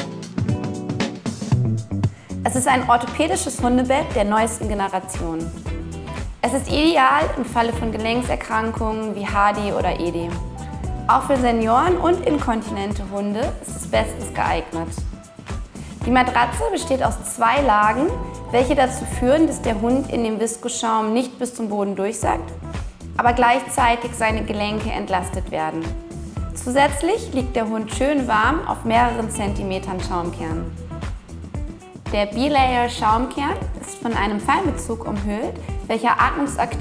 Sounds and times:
Music: 0.0 - 36.8
Speech: 2.5 - 5.5, 6.4 - 10.4, 11.1 - 15.1, 16.0 - 22.5, 23.2 - 25.9, 26.6 - 30.7, 32.1 - 36.8.

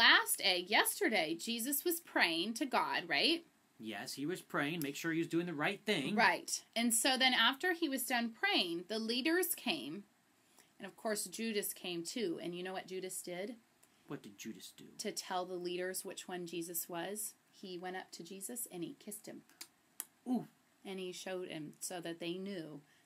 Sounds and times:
Speech: 0.0 - 10.0, 10.8 - 19.5, 20.3 - 22.8
Inside, small room: 0.0 - 23.0.

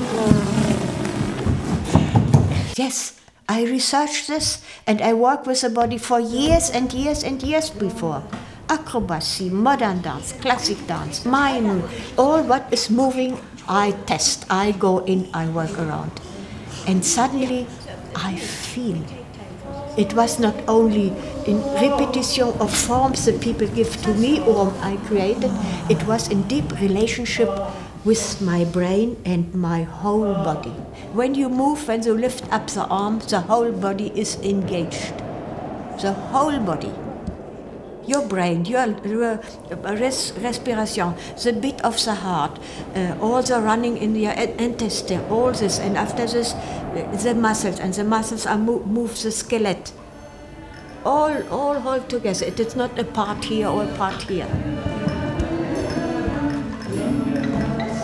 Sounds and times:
Speech: 2.7 - 35.2, 36.0 - 37.0, 38.1 - 50.0, 51.0 - 54.6.

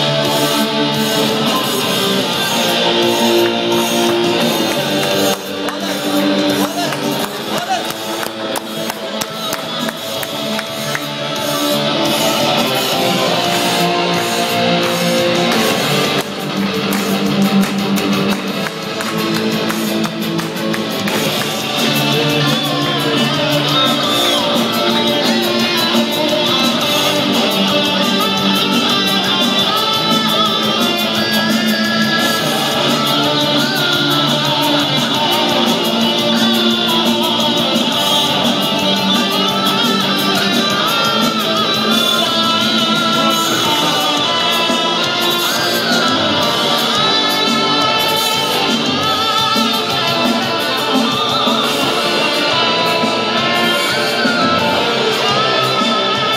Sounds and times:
Electric guitar: 0.0 - 56.3.

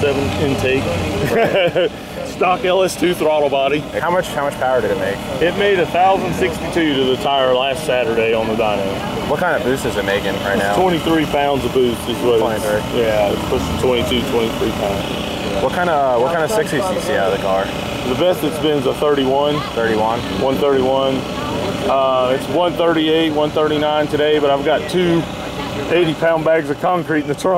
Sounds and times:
Car: 0.0 - 7.3, 8.0 - 27.5
Outside, urban or manmade: 0.0 - 27.5.

